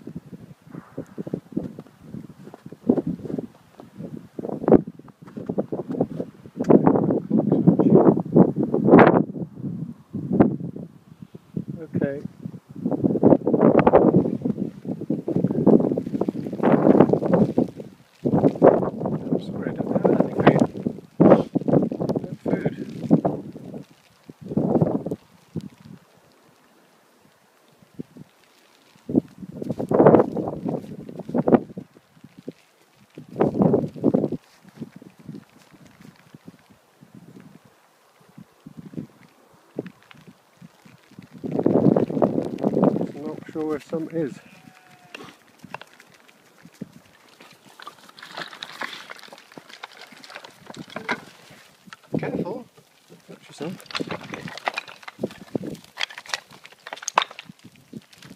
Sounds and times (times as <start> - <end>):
Speech: 11.8 - 12.3, 19.3 - 20.6, 22.2 - 22.9, 43.0 - 44.5, 52.2 - 53.9.